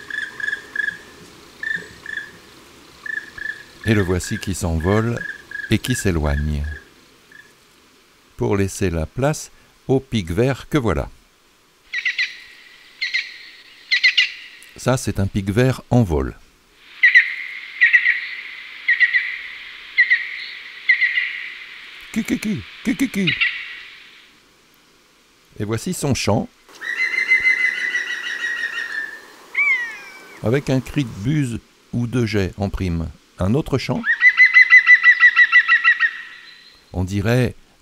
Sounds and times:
Speech: 3.8 - 6.8, 8.4 - 11.2, 14.8 - 16.4, 22.1 - 23.4, 25.6 - 26.5, 30.4 - 34.1, 37.0 - 37.6
Bird: 26.8 - 30.4.

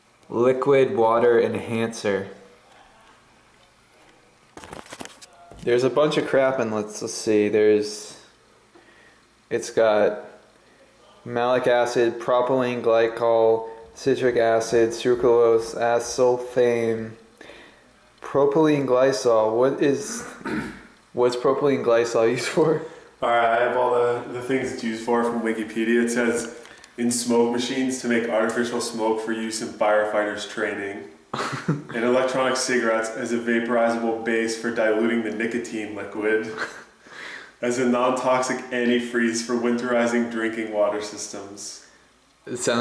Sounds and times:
Speech: 0.3 - 3.2, 5.2 - 8.4, 9.5 - 17.3, 18.2 - 31.2, 31.9 - 36.8, 37.6 - 41.9, 42.5 - 42.8.

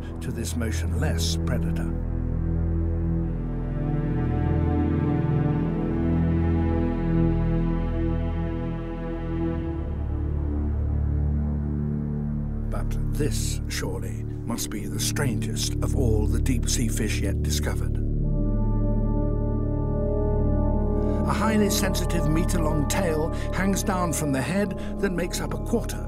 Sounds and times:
Theme music: 0.5 - 26.0.

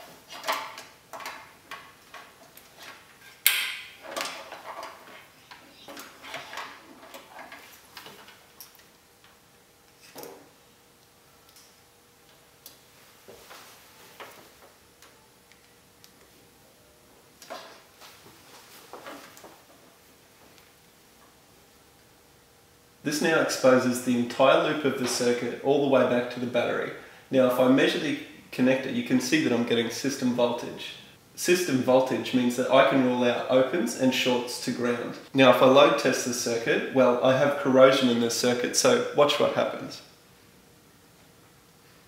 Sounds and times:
Speech: 23.0 - 40.1.

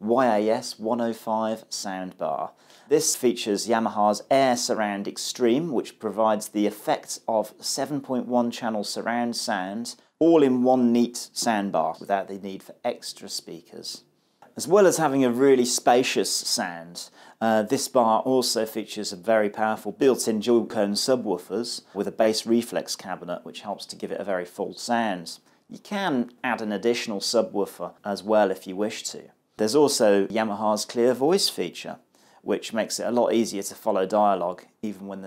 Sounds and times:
Speech: 0.0 - 35.2.

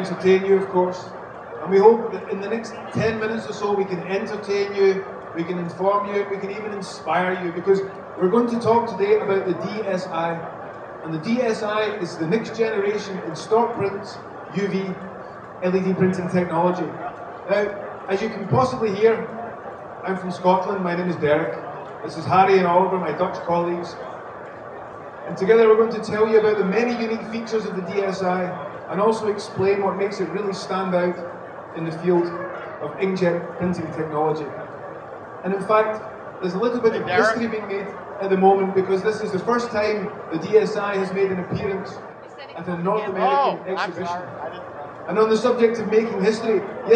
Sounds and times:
Speech: 0.0 - 10.4, 11.0 - 15.0, 15.6 - 19.3, 20.1 - 24.0, 25.3 - 31.2, 31.8 - 34.6, 35.4 - 46.9.

